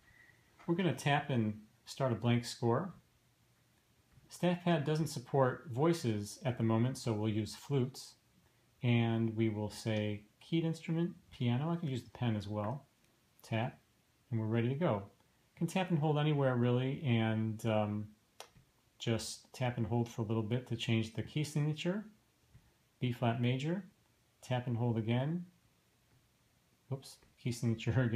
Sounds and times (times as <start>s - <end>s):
Speech: 0.6s - 3.0s, 4.3s - 8.2s, 8.8s - 18.2s, 19.0s - 22.2s, 23.0s - 25.6s, 26.9s - 28.1s.